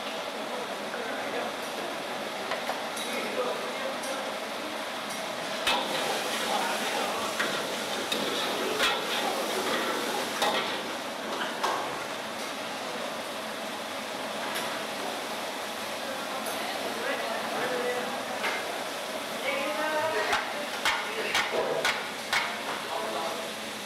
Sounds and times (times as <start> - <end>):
Speech: 3.0 - 4.8, 6.4 - 7.4, 16.0 - 21.8.